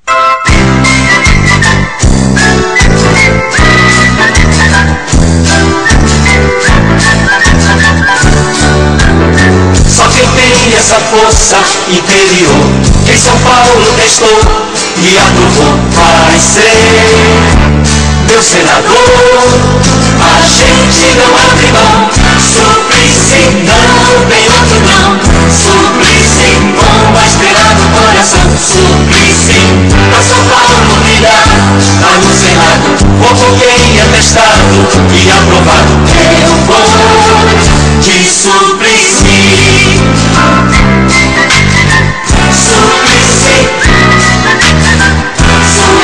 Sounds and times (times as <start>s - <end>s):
Jingle (music): 0.0s - 46.0s.